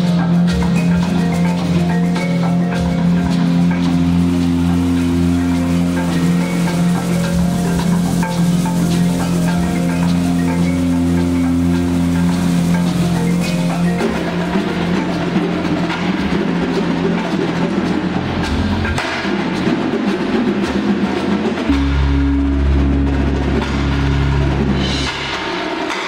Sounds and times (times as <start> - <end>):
Percussion: 0.0 - 26.0.